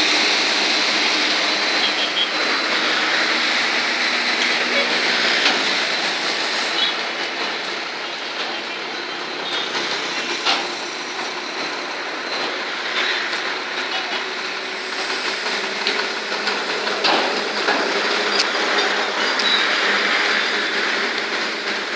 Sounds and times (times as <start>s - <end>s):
Truck: 0.0s - 21.9s.